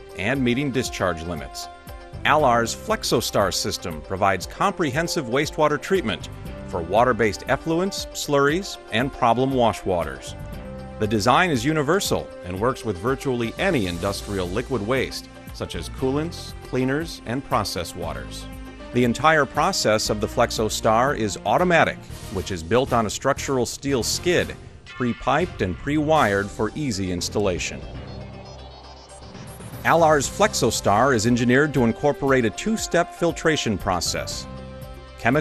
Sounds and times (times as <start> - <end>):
Music: 0.0 - 35.4
Speech: 0.2 - 1.7, 2.3 - 10.3, 11.0 - 28.0, 29.9 - 34.5.